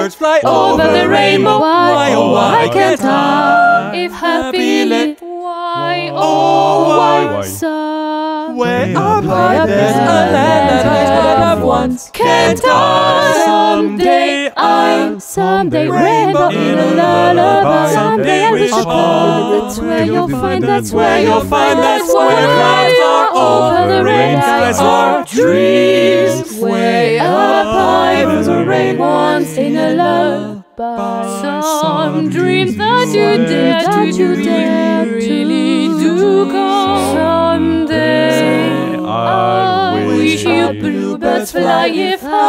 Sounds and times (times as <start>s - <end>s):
Music: 32.3s - 42.4s.